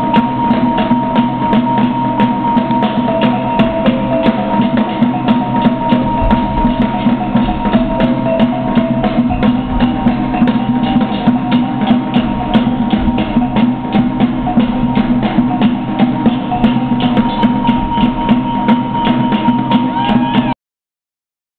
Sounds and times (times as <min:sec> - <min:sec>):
Music: 0:00.0 - 0:20.6.